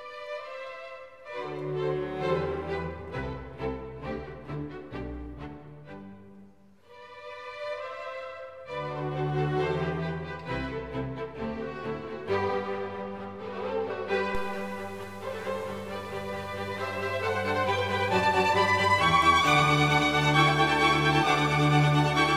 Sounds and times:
Music: 0.0s - 22.3s.

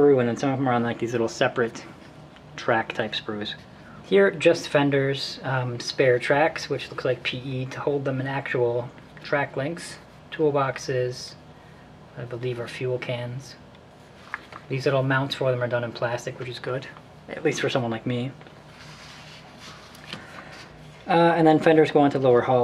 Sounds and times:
Speech: 0.0s - 2.0s, 2.6s - 11.4s, 12.2s - 13.7s, 14.7s - 18.4s, 21.0s - 22.6s.

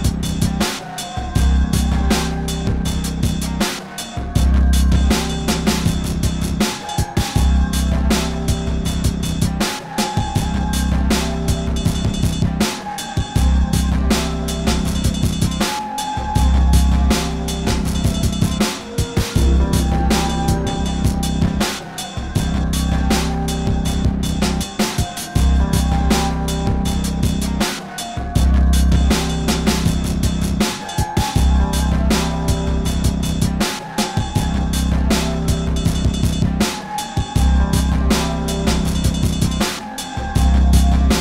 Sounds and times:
Soundtrack music: 0.0s - 41.2s.

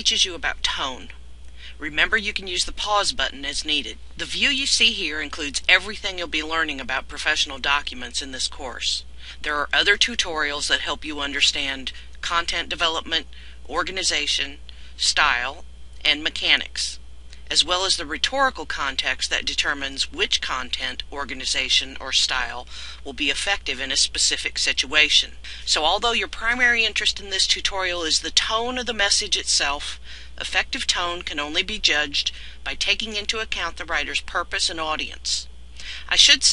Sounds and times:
Speech: 0.0s - 36.5s.

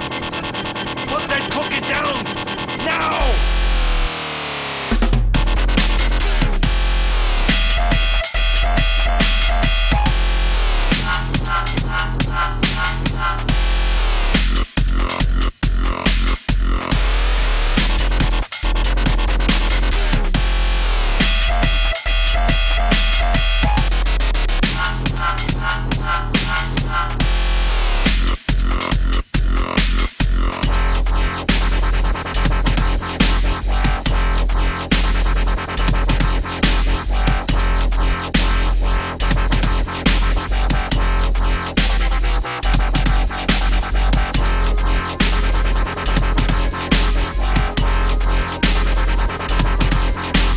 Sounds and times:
Dubstep: 0.0s - 50.5s.

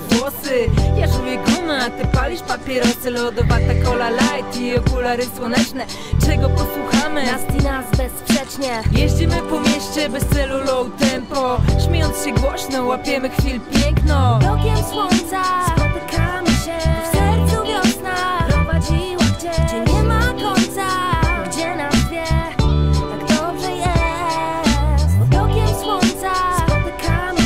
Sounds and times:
Rhythm and blues: 0.0s - 27.4s.

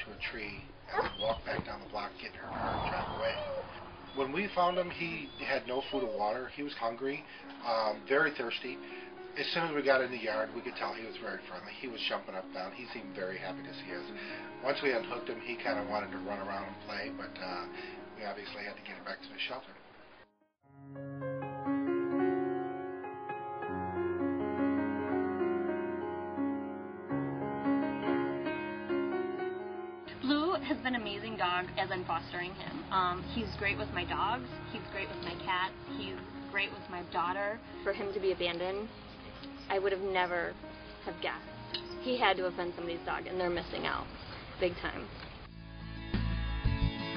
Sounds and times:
Music: 1.5s - 47.1s.

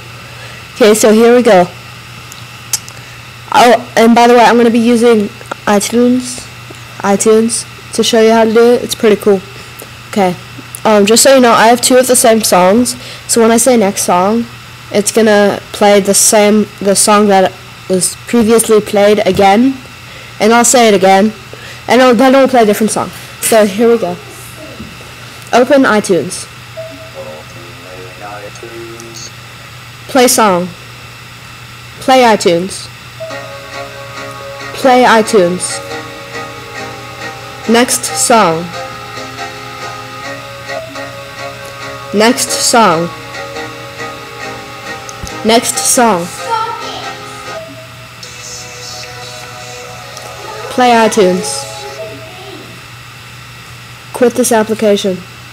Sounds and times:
Female speech, woman speaking: 0.8s - 1.8s, 3.5s - 9.5s, 10.1s - 19.8s, 20.4s - 24.8s, 25.5s - 26.5s, 30.1s - 30.8s, 32.0s - 33.0s, 34.8s - 35.9s, 37.7s - 38.7s, 42.2s - 43.1s, 45.4s - 47.2s, 50.7s - 52.8s, 54.2s - 55.3s.

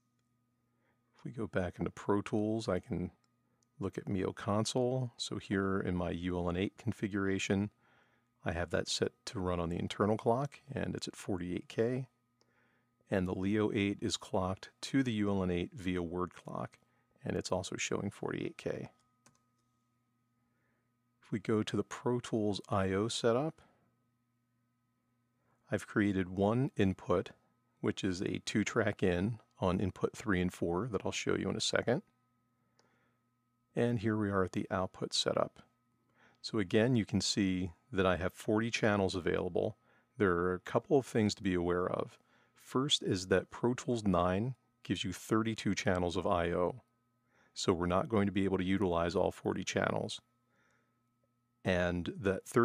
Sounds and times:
Speech: 1.3s - 3.2s, 3.8s - 7.8s, 8.4s - 12.1s, 13.1s - 19.0s, 21.3s - 23.6s, 25.7s - 32.1s, 33.8s - 35.6s, 36.4s - 46.8s, 47.6s - 50.3s, 51.7s - 52.6s.

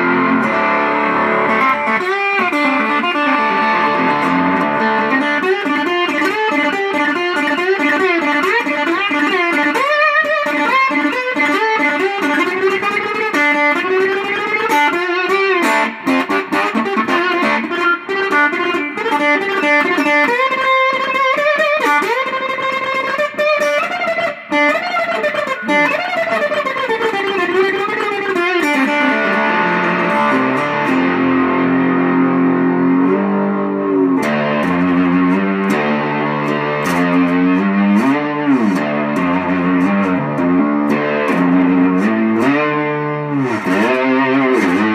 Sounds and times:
Tapping (guitar technique): 0.0s - 44.9s.

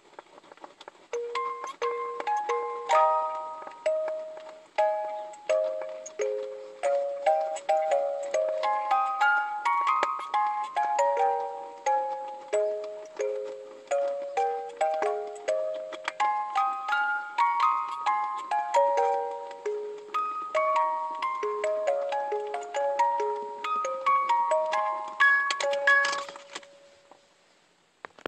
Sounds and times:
Happy music: 1.4s - 26.6s.

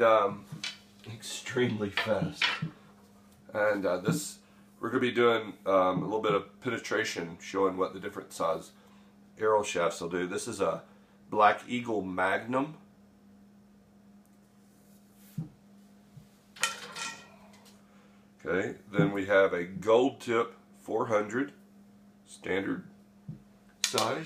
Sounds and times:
Speech: 0.0s - 2.6s, 3.5s - 8.8s, 9.4s - 12.8s, 18.4s - 21.6s, 22.3s - 22.9s, 23.9s - 24.2s.

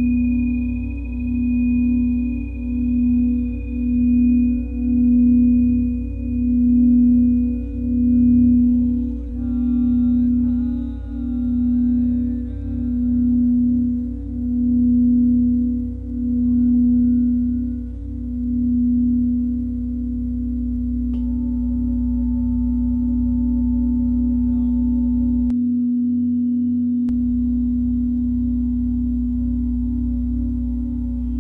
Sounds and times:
Singing bowl: 0.0s - 31.4s.

